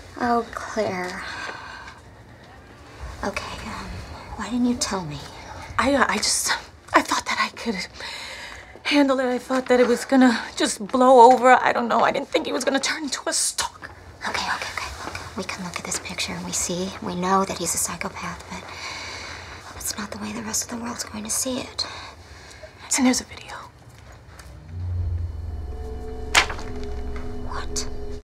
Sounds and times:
Music: 24.6 - 28.2.

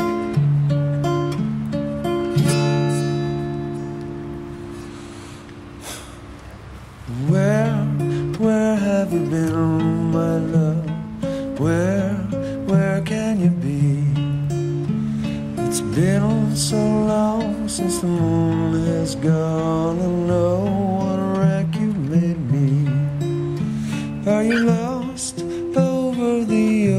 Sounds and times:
Music: 0.0 - 5.5, 7.1 - 26.9.

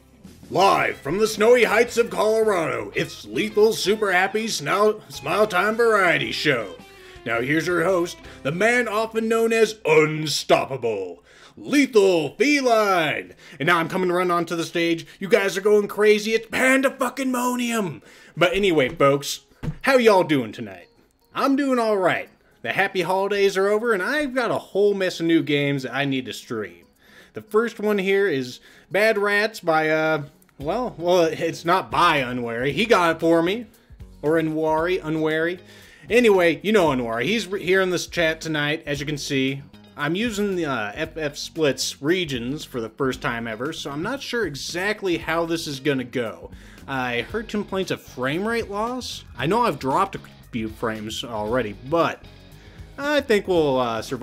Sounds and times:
Speech: 0.5 - 26.8, 27.4 - 52.2, 53.0 - 54.2.

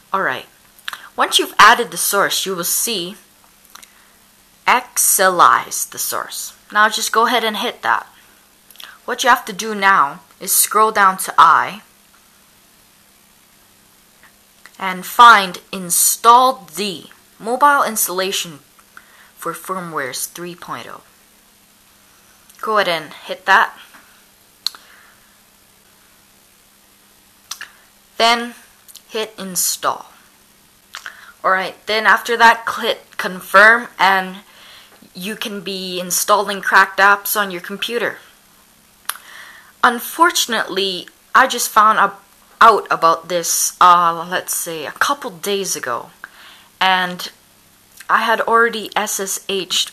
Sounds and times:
Speech: 0.1 - 3.3, 4.7 - 8.2, 8.8 - 11.9, 14.7 - 18.7, 19.4 - 21.1, 22.6 - 23.9, 27.6 - 30.2, 31.0 - 38.3, 39.8 - 46.2, 46.8 - 47.4, 48.0 - 49.9.

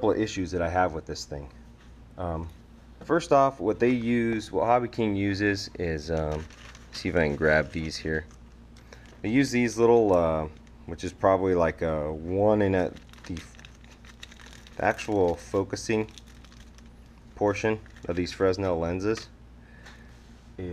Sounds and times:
Speech: 0.0 - 1.6, 2.2 - 8.3, 9.2 - 13.6, 14.8 - 16.2, 17.4 - 19.3.

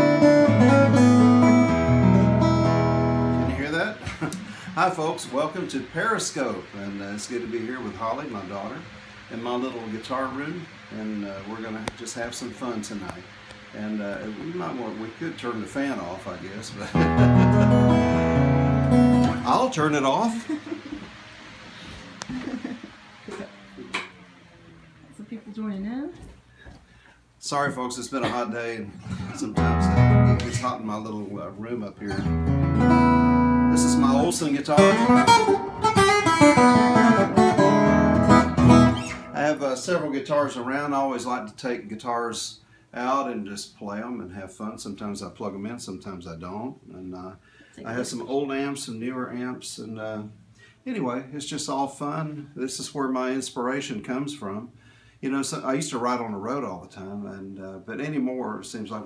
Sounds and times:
Music: 0.0 - 3.7, 16.9 - 19.6, 29.6 - 30.6, 32.1 - 39.4
Speech: 3.5 - 4.0, 4.8 - 17.0, 19.4 - 20.4, 27.4 - 32.3, 33.7 - 35.1, 39.4 - 59.0.

